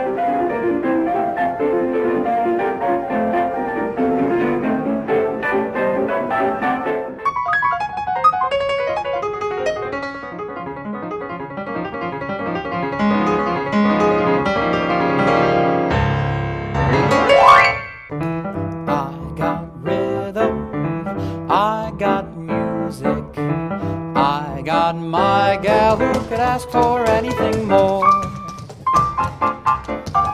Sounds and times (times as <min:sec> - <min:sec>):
Music: 0:00.0 - 0:30.3.